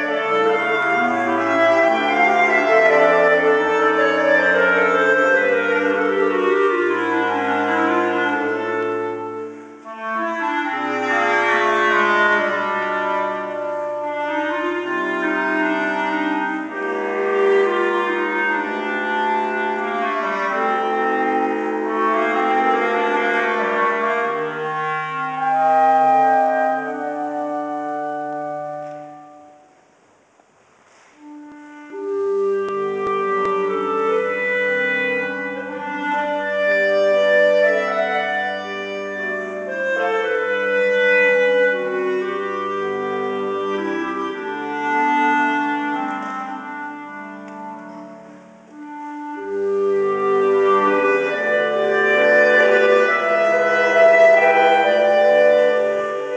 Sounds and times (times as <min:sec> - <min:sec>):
Clarinet: 0:00.0 - 0:56.3.